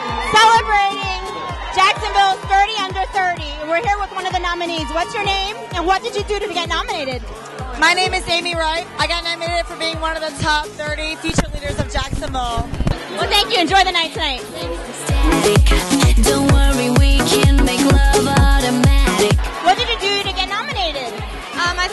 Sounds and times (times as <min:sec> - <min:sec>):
Music: 0:00.0 - 0:21.9
Speech: 0:01.8 - 0:07.2, 0:19.6 - 0:21.9.